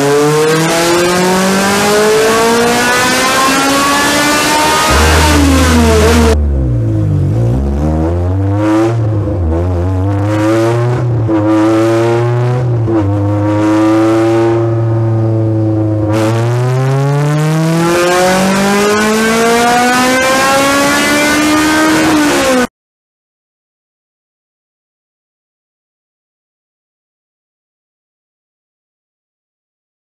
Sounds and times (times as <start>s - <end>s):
Accelerating, revving, vroom: 0.0s - 6.4s, 7.7s - 22.7s
Car: 0.0s - 22.7s.